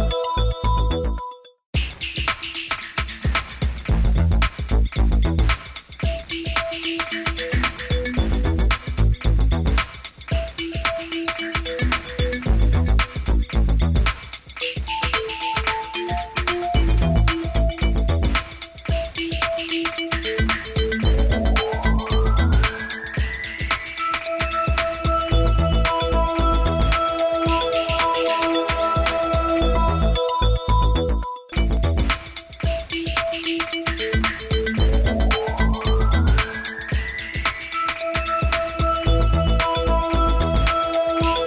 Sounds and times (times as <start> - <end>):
Music: 0.0 - 41.4.